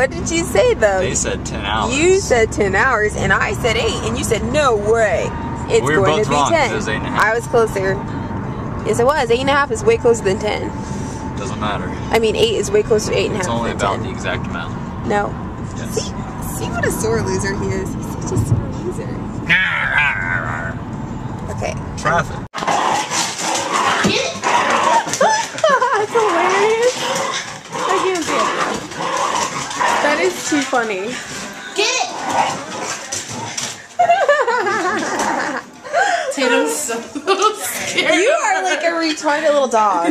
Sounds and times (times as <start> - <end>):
Vehicle: 0.0 - 40.1.